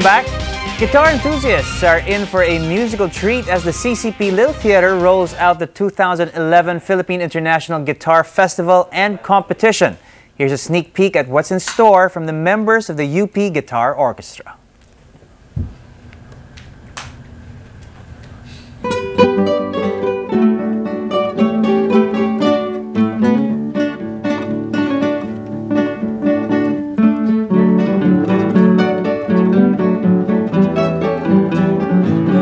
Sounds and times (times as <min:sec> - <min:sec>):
Acoustic guitar: 0:00.0 - 0:05.6, 0:18.7 - 0:32.4
Strum: 0:00.0 - 0:05.6, 0:18.8 - 0:32.4
Speech: 0:00.0 - 0:14.6.